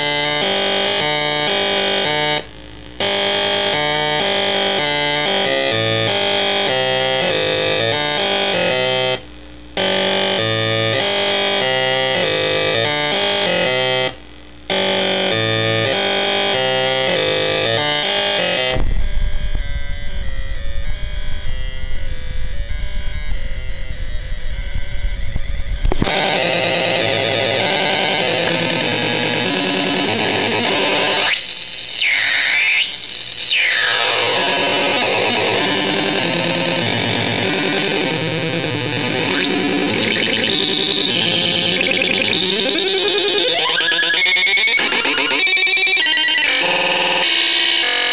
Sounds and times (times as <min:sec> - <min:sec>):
Synthesizer: 0:00.0 - 0:48.1.